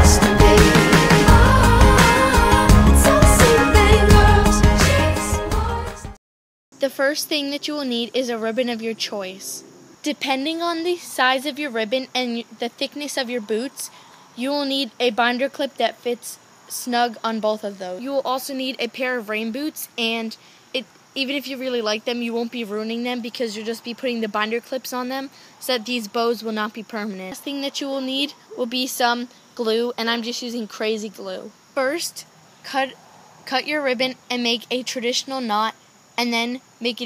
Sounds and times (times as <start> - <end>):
Speech: 6.8 - 37.0.